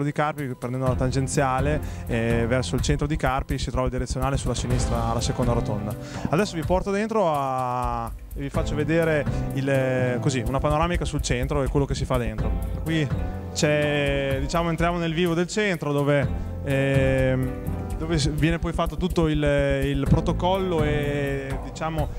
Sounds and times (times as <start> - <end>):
Music: 0.0 - 22.1
Speech: 0.0 - 22.1.